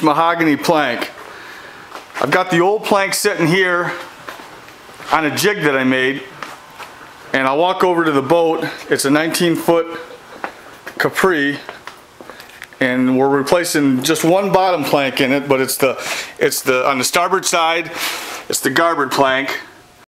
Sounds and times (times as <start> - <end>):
Speech: 0.0 - 1.2, 2.2 - 4.1, 5.1 - 6.4, 7.3 - 10.2, 11.0 - 11.8, 12.8 - 19.8.